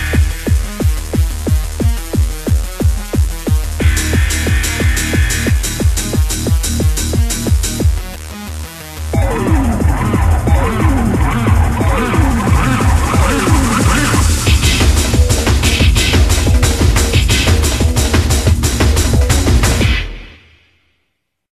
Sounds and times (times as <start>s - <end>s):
Soundtrack music: 3.5s - 20.4s.